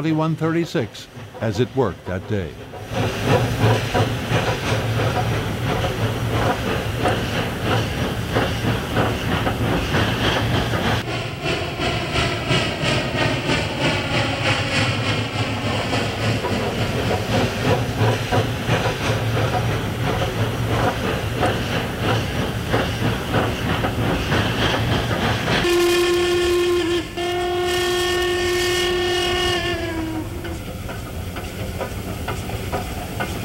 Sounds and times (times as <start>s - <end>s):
Railroad car, train wagon: 0.0s - 33.4s
Train: 0.0s - 33.4s.